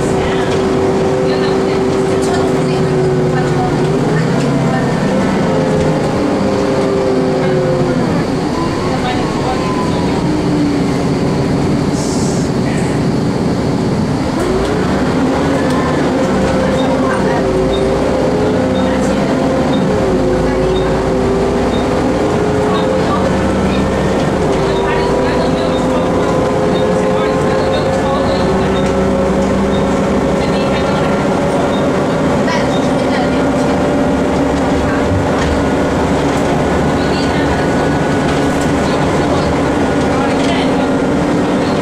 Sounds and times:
Speech: 0:00.0 - 0:06.4, 0:07.4 - 0:10.6, 0:15.4 - 0:21.4, 0:22.5 - 0:29.3, 0:30.2 - 0:35.8, 0:36.4 - 0:41.8
Bus: 0:00.0 - 0:41.8.

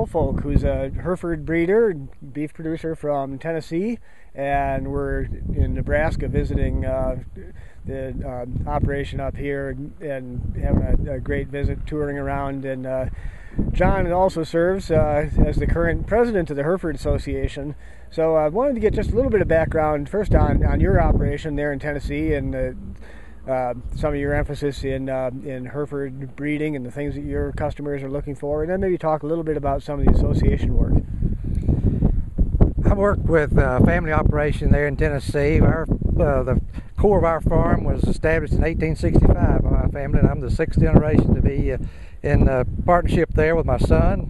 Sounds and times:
Speech: 0:00.0 - 0:31.0, 0:32.8 - 0:44.2.

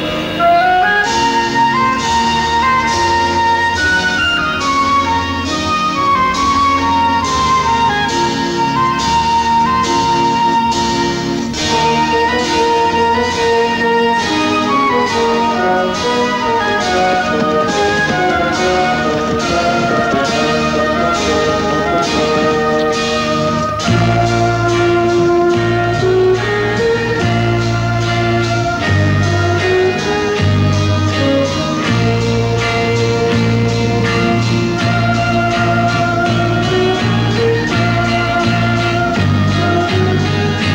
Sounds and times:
Music: 0:00.0 - 0:40.7.

